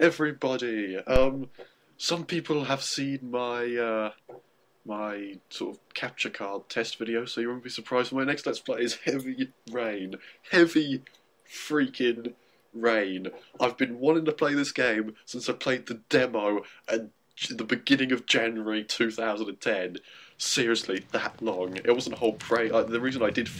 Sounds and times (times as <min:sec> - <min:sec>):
Speech: 0:00.0 - 0:04.2, 0:04.9 - 0:23.5.